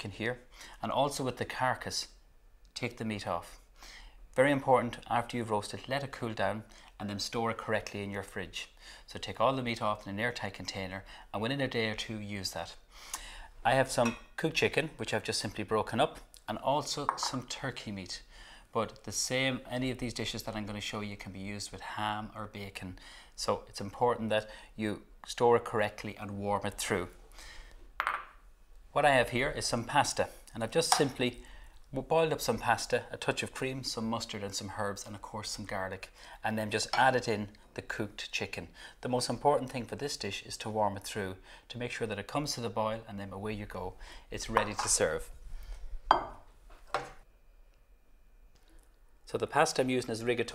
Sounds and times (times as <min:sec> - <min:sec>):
Speech: 0:00.0 - 0:03.6, 0:04.4 - 0:12.8, 0:13.6 - 0:27.2, 0:28.9 - 0:45.3, 0:49.3 - 0:50.5.